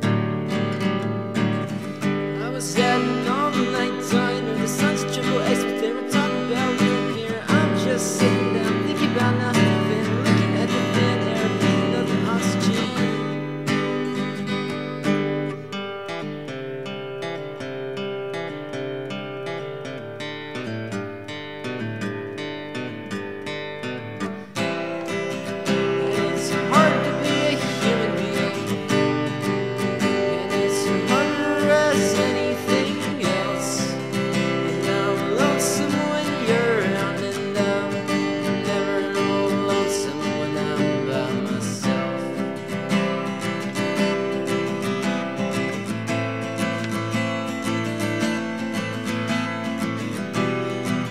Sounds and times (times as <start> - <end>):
Music: 0.0 - 51.1.